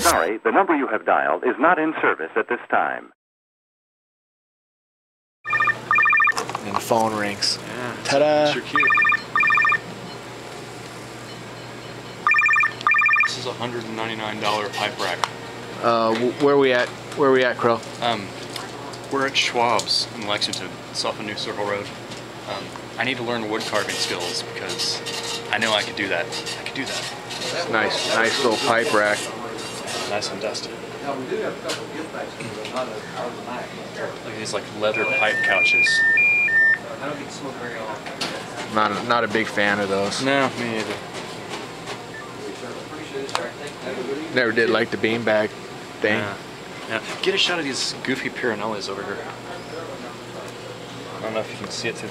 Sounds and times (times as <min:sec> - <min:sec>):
Speech: 0:00.0 - 0:03.2, 0:22.5 - 0:36.0, 0:36.8 - 0:41.0, 0:42.4 - 0:50.5, 0:51.2 - 0:52.1.